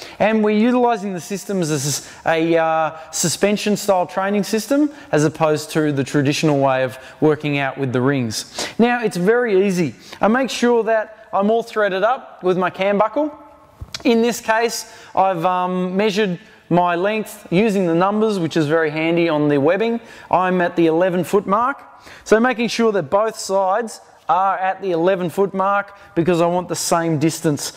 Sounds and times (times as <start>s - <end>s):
Speech: 0.2s - 27.7s.